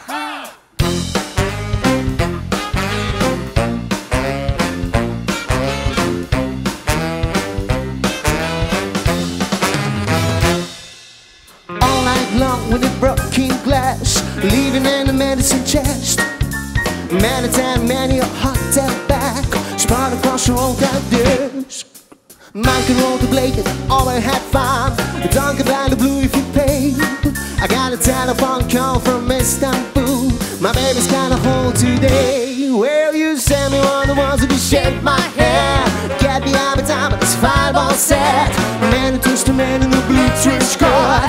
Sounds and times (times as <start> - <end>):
Music: 0.4 - 41.2.